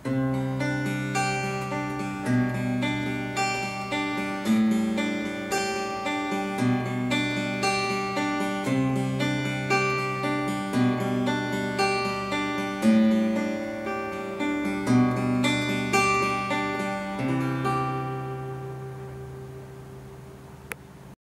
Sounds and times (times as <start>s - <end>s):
Acoustic guitar: 0.0s - 21.2s.